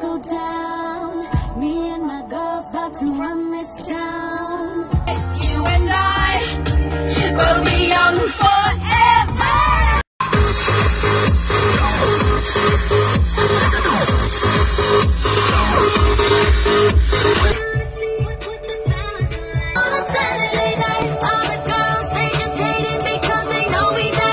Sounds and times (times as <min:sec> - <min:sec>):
Female singing: 0:00.0 - 0:06.6, 0:07.2 - 0:10.0, 0:17.6 - 0:24.3
Music: 0:00.0 - 0:24.3.